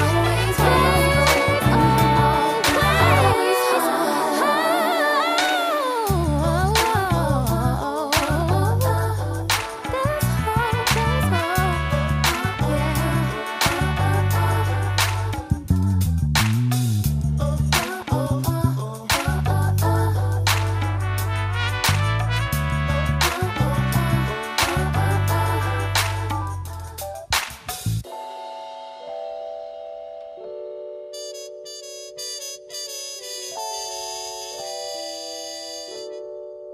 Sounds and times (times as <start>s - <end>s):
Music: 0.0s - 36.7s.